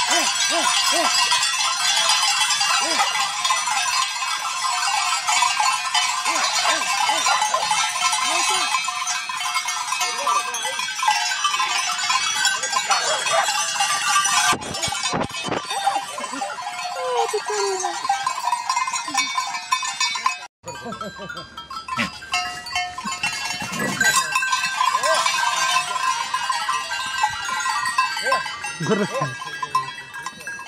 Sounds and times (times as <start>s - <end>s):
Goat: 6.0s - 8.8s, 23.1s - 26.0s
Speech: 17.0s - 18.0s.